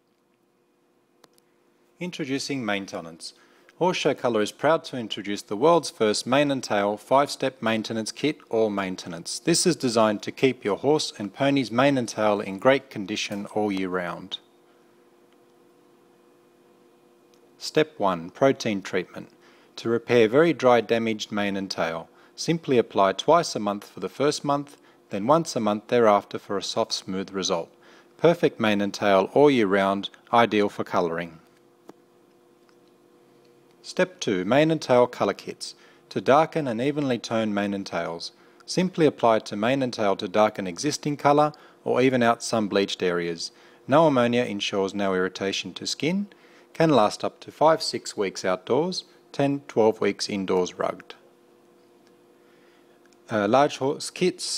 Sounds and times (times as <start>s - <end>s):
Speech: 2.0s - 14.5s, 17.6s - 31.5s, 33.8s - 51.2s, 53.3s - 54.5s.